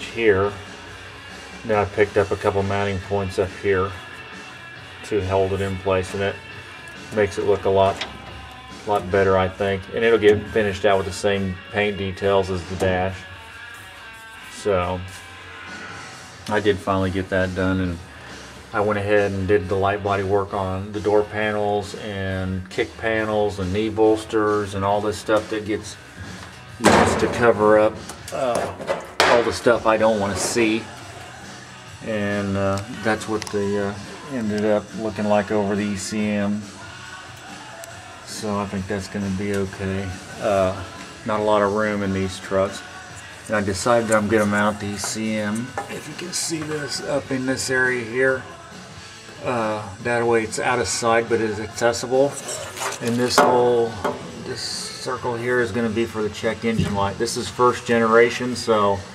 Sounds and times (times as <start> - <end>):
Speech: 0.0 - 0.6, 1.6 - 4.0, 5.0 - 6.4, 7.1 - 8.0, 8.8 - 13.2, 14.6 - 15.0, 16.5 - 18.0, 18.7 - 26.0, 26.8 - 30.9, 32.0 - 36.6, 38.3 - 42.8, 43.5 - 48.4, 49.4 - 59.1
Music: 0.0 - 59.1.